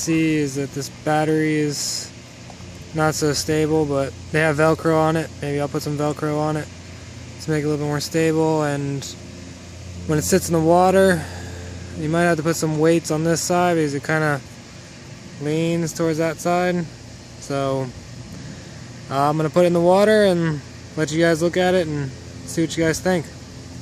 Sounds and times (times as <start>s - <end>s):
Speech: 0.0s - 2.1s, 2.9s - 6.7s, 7.4s - 9.2s, 10.1s - 11.3s, 12.0s - 14.4s, 15.4s - 18.0s, 19.1s - 23.4s.